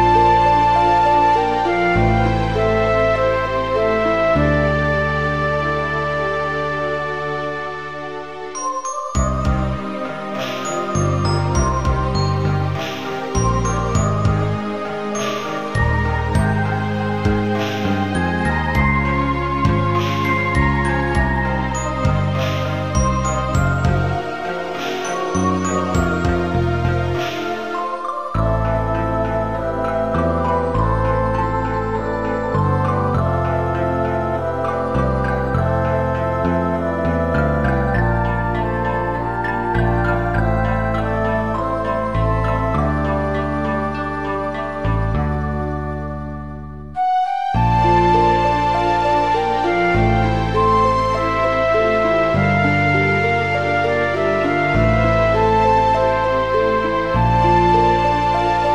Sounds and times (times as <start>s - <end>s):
New-age music: 0.0s - 58.7s.